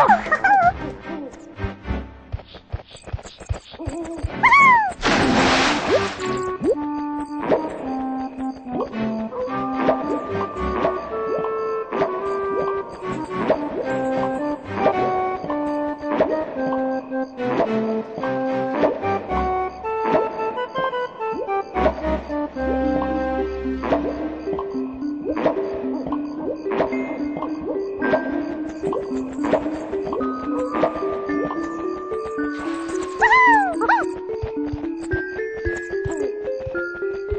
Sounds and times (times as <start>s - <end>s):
Music: 0.0s - 37.3s.